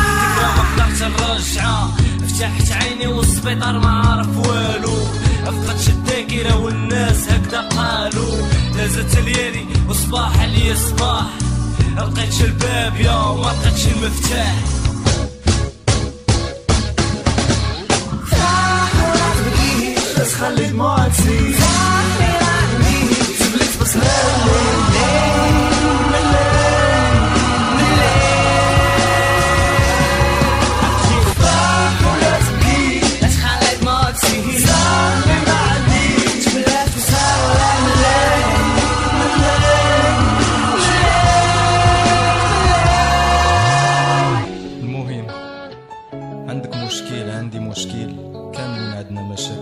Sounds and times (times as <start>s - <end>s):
Exciting music: 0.0s - 6.0s, 6.6s - 45.2s
Rapping: 0.0s - 14.7s, 18.2s - 43.8s, 46.5s - 49.6s.